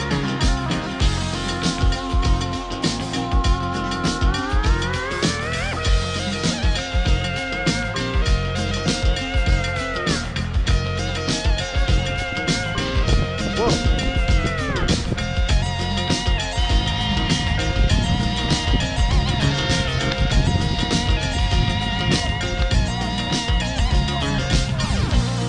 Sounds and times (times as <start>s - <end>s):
Music: 0.0s - 25.4s.